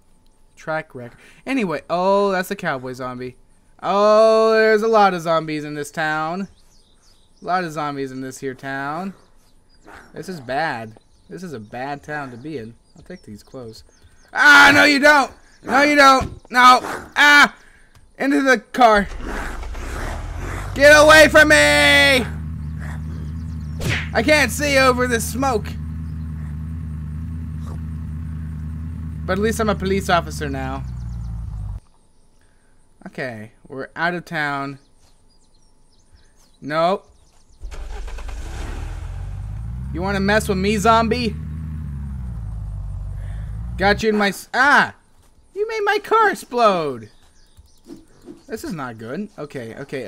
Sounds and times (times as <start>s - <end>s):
Speech: 0.6s - 6.5s, 7.4s - 9.2s, 10.2s - 17.6s, 18.2s - 19.2s, 20.8s - 22.3s, 24.1s - 25.8s, 29.2s - 30.9s, 33.0s - 34.8s, 36.6s - 37.0s, 39.9s - 41.4s, 43.8s - 45.0s, 45.6s - 47.1s, 48.5s - 50.0s.